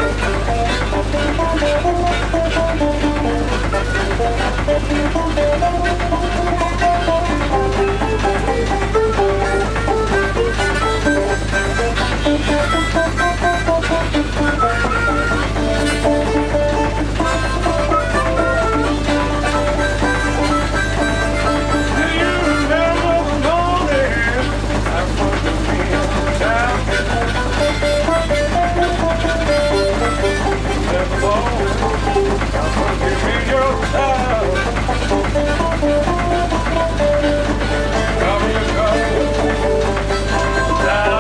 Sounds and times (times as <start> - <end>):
Music: 0.0 - 41.2.